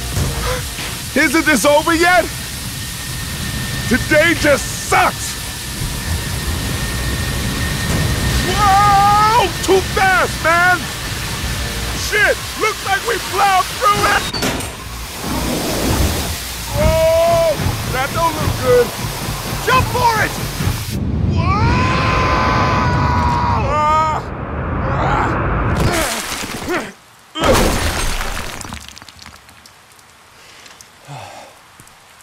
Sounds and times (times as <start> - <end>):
Speech: 1.2 - 2.3, 3.9 - 5.4, 8.4 - 10.8, 12.0 - 14.3, 16.7 - 18.9, 19.7 - 20.3.